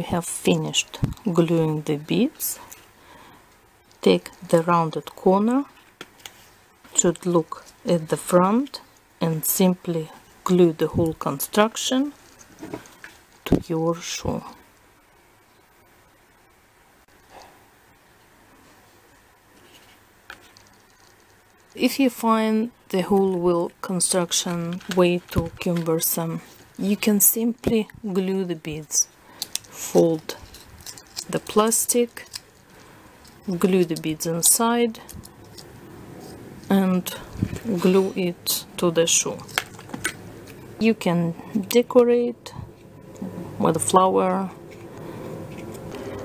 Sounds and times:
Speech: 0.0s - 2.6s, 4.0s - 5.7s, 7.0s - 12.2s, 13.5s - 14.6s, 21.8s - 29.1s, 29.7s - 30.4s, 31.2s - 32.3s, 33.5s - 35.1s, 36.7s - 39.5s, 40.8s - 44.6s
Inside, small room: 0.0s - 46.2s.

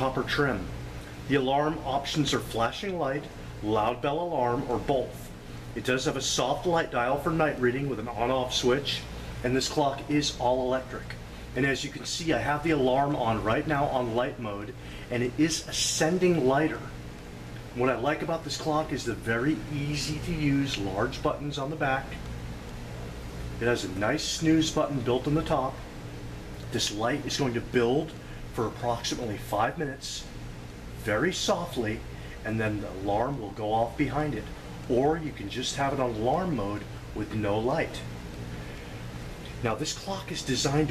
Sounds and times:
Speech: 0.0s - 17.0s, 17.8s - 22.3s, 23.6s - 25.8s, 26.7s - 30.3s, 31.0s - 38.1s, 39.6s - 40.9s.

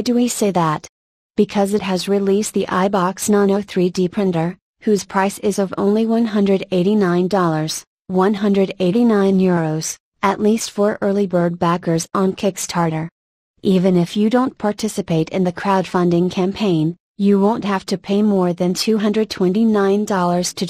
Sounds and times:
Speech: 0.0s - 20.6s.

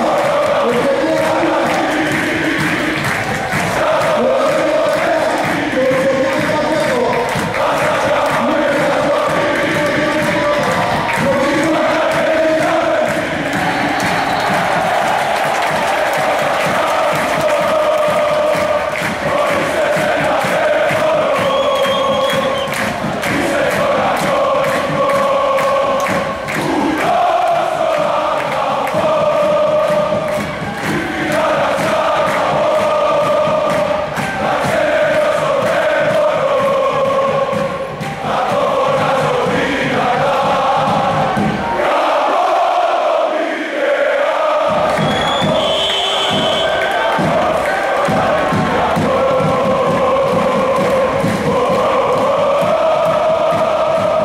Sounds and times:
Cheering: 0.0s - 54.2s.

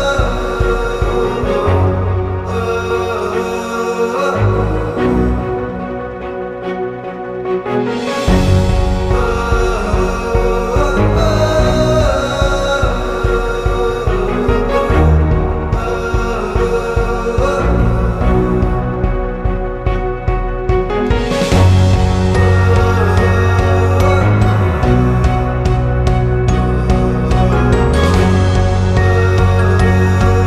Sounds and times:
Music: 0.0s - 30.4s.

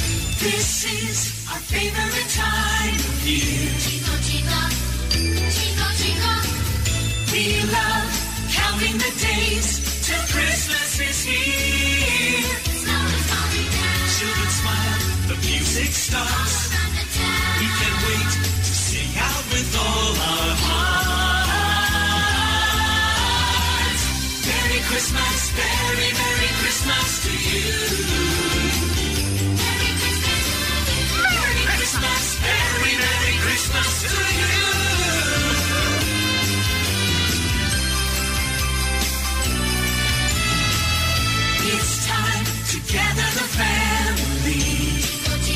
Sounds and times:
Music: 0.0s - 45.5s.

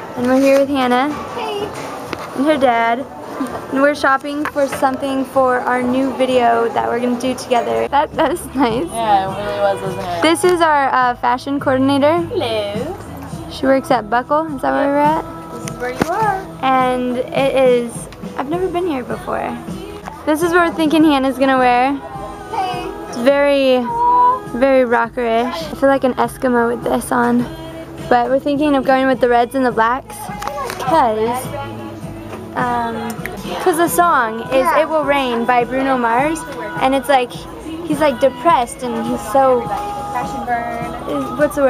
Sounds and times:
Music: 0.0s - 41.7s.

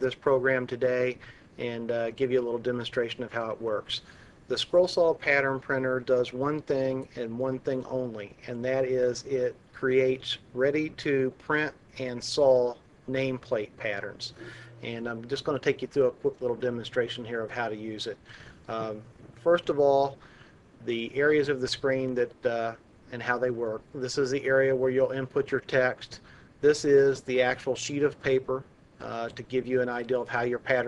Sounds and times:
Speech: 0.0s - 20.2s, 20.8s - 30.8s.

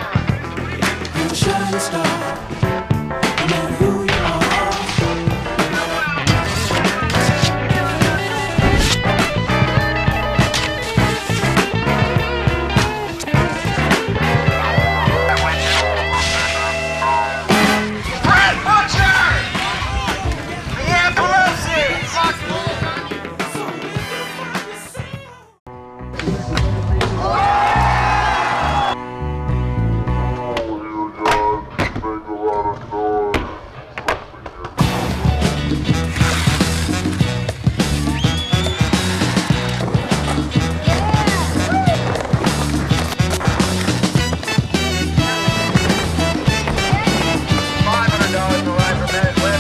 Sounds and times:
Exciting music: 0.0s - 24.6s, 34.8s - 49.6s
Speech: 18.2s - 24.1s, 46.8s - 49.6s.

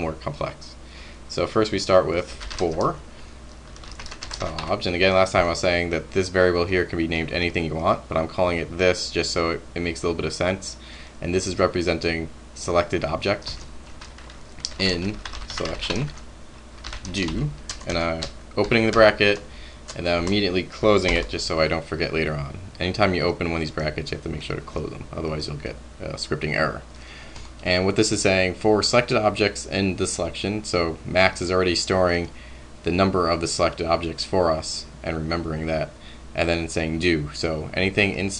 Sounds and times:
Typing: 3.7s - 4.7s, 13.4s - 16.2s, 16.8s - 19.0s.

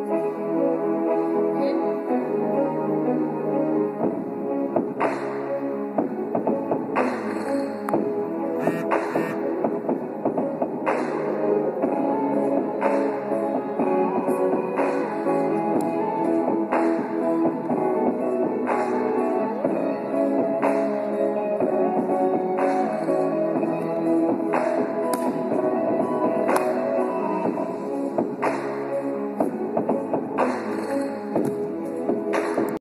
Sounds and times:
Dance music: 1.2s - 32.8s.

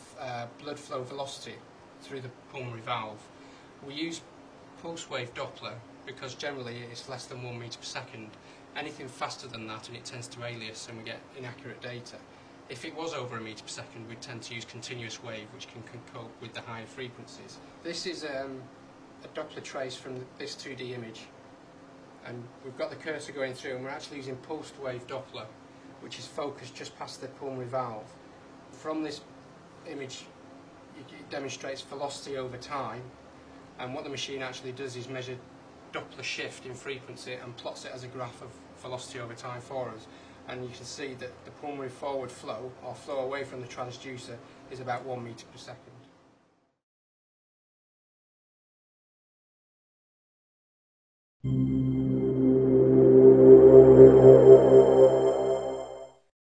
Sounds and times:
Speech: 0.0s - 21.4s, 22.2s - 33.2s, 33.8s - 46.1s
Music: 51.5s - 56.3s.

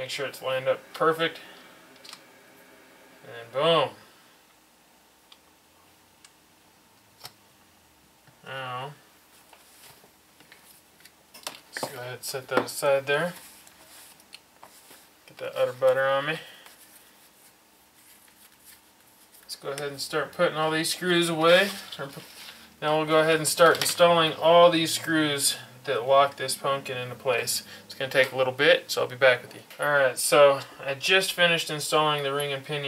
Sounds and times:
Speech: 0.0s - 1.4s, 3.3s - 4.0s, 8.5s - 9.0s, 11.8s - 13.4s, 15.3s - 16.5s, 19.5s - 32.8s.

